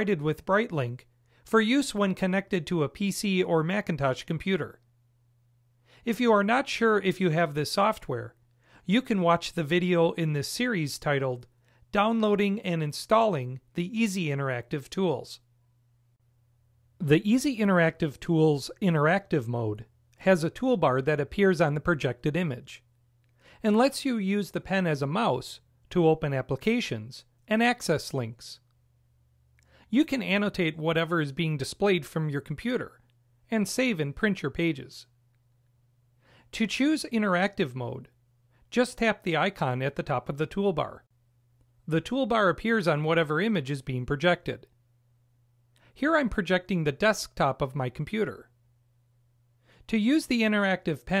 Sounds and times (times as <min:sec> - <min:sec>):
Speech: 0:00.0 - 0:04.8, 0:06.0 - 0:15.4, 0:17.0 - 0:22.9, 0:23.6 - 0:28.7, 0:29.9 - 0:35.1, 0:36.5 - 0:41.1, 0:41.8 - 0:44.7, 0:45.9 - 0:48.5, 0:49.9 - 0:51.2.